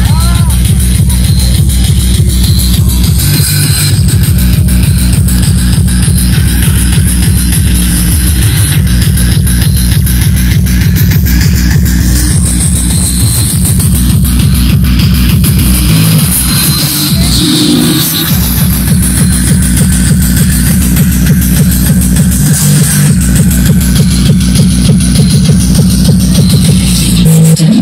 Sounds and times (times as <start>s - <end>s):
Speech: 0.0s - 1.6s, 17.1s - 18.0s
Music: 0.0s - 27.8s.